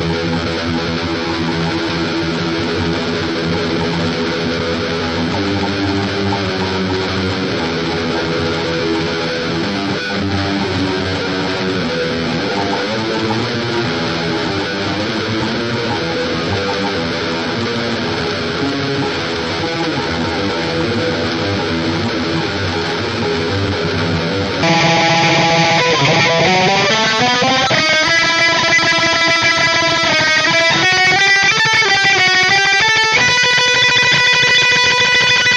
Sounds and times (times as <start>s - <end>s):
Strum: 1.6s - 29.2s.